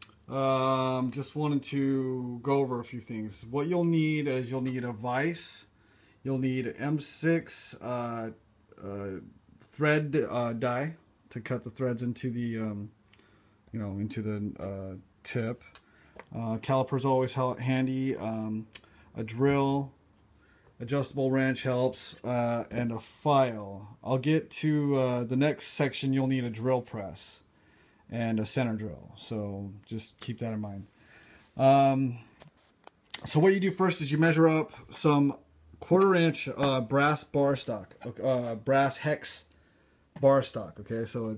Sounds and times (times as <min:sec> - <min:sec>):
Speech: 0:00.3 - 0:12.9, 0:13.7 - 0:15.7, 0:16.3 - 0:20.0, 0:20.8 - 0:27.4, 0:28.1 - 0:30.9, 0:31.6 - 0:32.3, 0:33.2 - 0:39.5, 0:40.2 - 0:41.3.